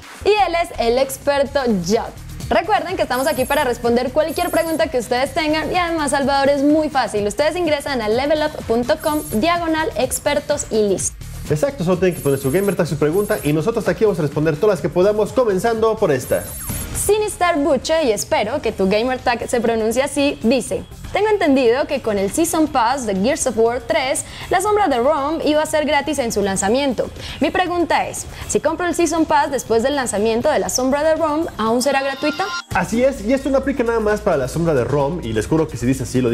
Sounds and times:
Music: 0.0s - 36.3s.

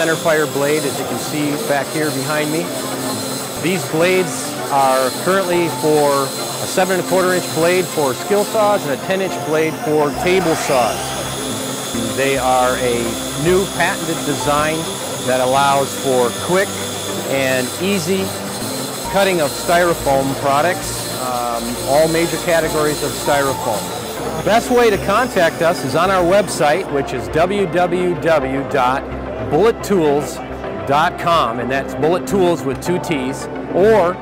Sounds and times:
Speech: 0.0s - 2.8s, 3.6s - 11.1s, 12.0s - 18.4s, 19.1s - 34.2s
Music: 0.0s - 34.2s.

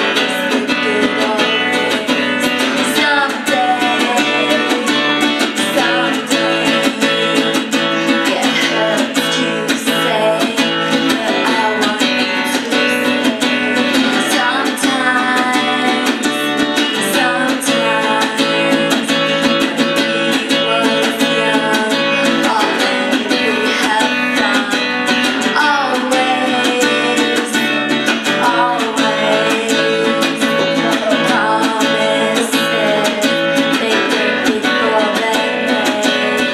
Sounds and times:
Female singing: 0.0s - 36.5s
Music: 0.0s - 36.5s.

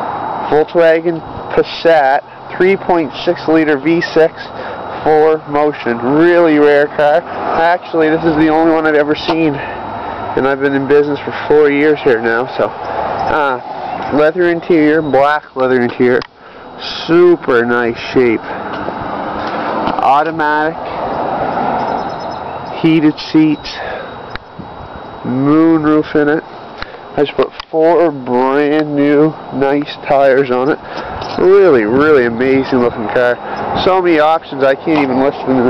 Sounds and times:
Speech: 0.5s - 9.7s, 10.4s - 18.4s, 20.0s - 20.8s, 22.8s - 23.9s, 25.2s - 26.5s, 27.2s - 35.6s.

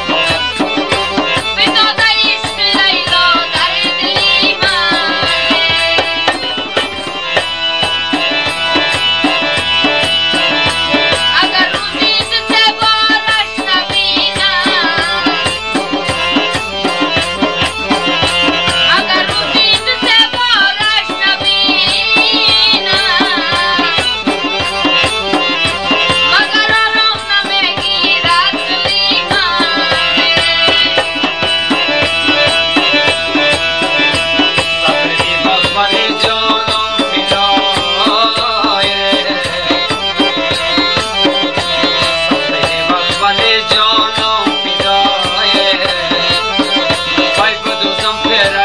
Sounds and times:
Traditional music: 0.0s - 48.6s.

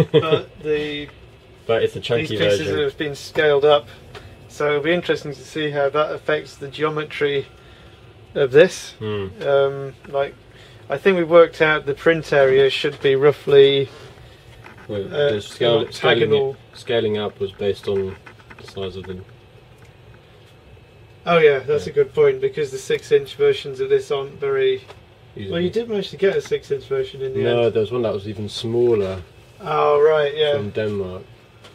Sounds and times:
Speech: 0.0s - 1.1s, 1.7s - 7.5s, 8.4s - 13.9s, 14.8s - 19.3s, 21.2s - 31.3s.

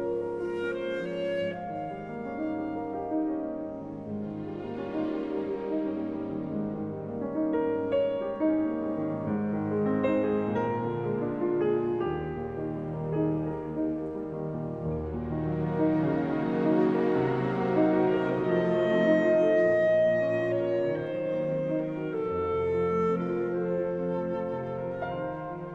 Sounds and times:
Music: 0.0s - 25.7s.

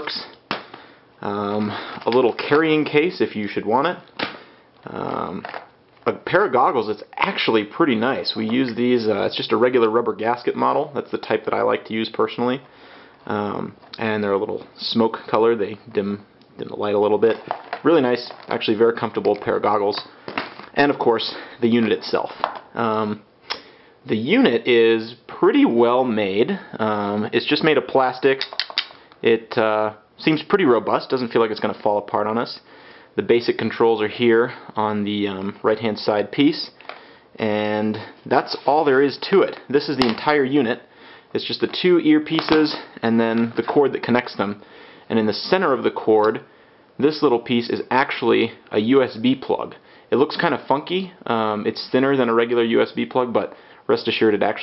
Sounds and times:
Speech: 0.0s - 0.4s, 1.2s - 4.1s, 4.8s - 23.3s, 24.0s - 28.5s, 29.2s - 36.8s, 37.4s - 54.6s.

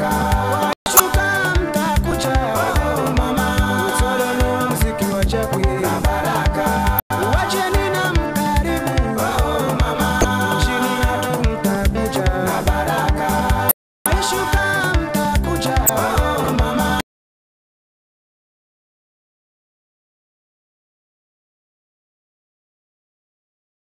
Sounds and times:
Dance music: 0.0s - 1.5s, 9.5s - 11.0s.

